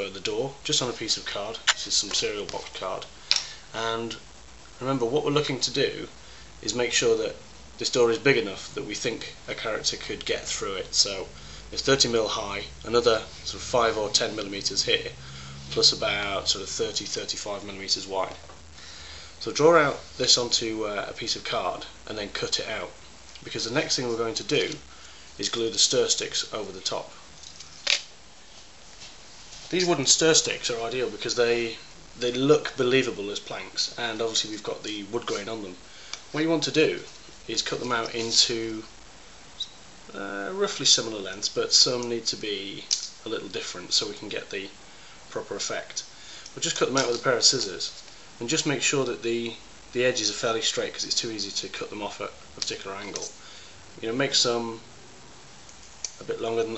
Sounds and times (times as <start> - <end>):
Speech: 0.0 - 4.2, 4.8 - 18.5, 19.4 - 27.2, 29.7 - 38.9, 40.1 - 53.4, 54.0 - 54.9, 56.2 - 56.7.